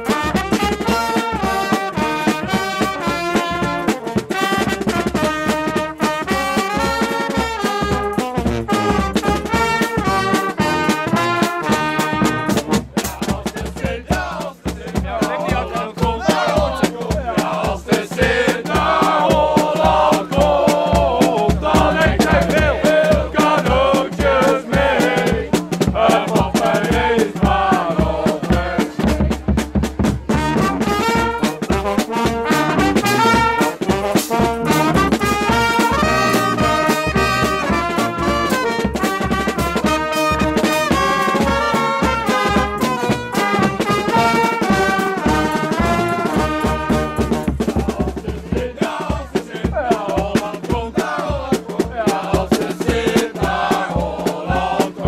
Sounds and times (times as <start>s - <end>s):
Music: 0.0s - 55.0s.